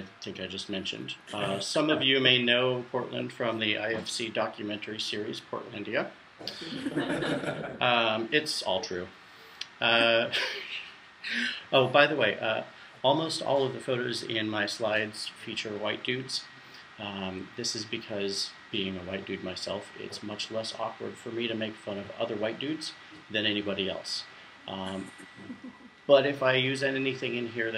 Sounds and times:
Speech: 0:00.0 - 0:07.1, 0:07.8 - 0:27.7.

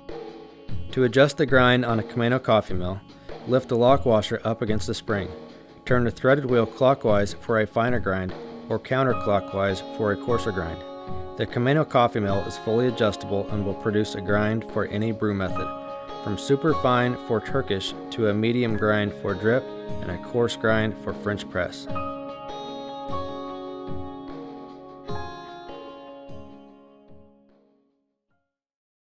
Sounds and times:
Music: 0:00.0 - 0:28.6
Speech: 0:00.9 - 0:10.8, 0:11.4 - 0:21.9.

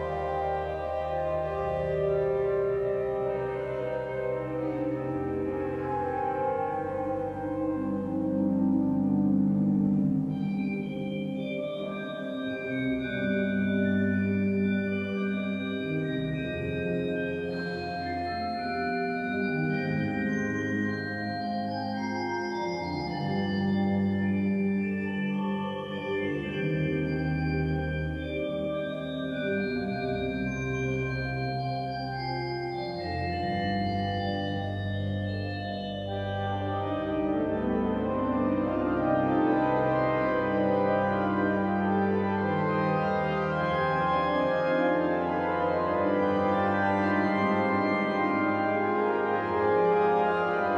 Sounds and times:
Organ: 0:00.0 - 0:50.7.

